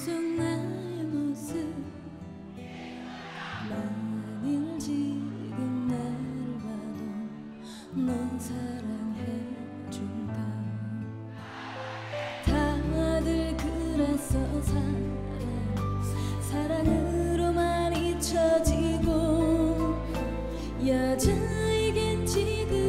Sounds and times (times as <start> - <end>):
Music: 0.0 - 22.8.